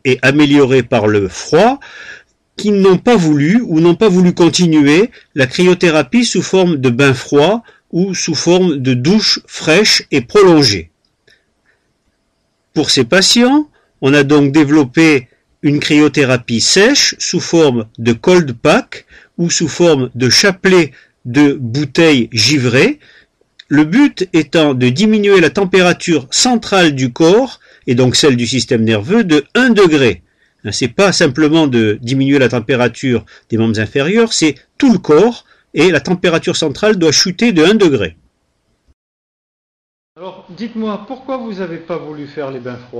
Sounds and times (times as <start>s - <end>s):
Speech: 0.0s - 1.9s, 2.6s - 10.9s, 12.8s - 23.0s, 23.6s - 38.2s, 40.2s - 42.9s.